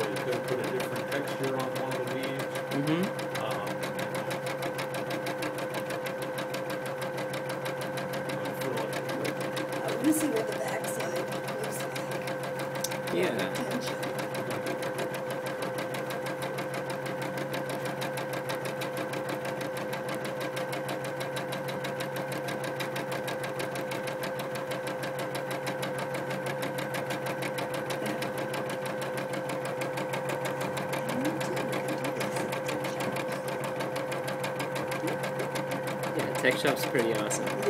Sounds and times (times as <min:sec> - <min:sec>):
Speech: 0:00.0 - 0:03.7, 0:13.1 - 0:14.0, 0:36.2 - 0:37.6
Sewing machine: 0:00.0 - 0:37.6.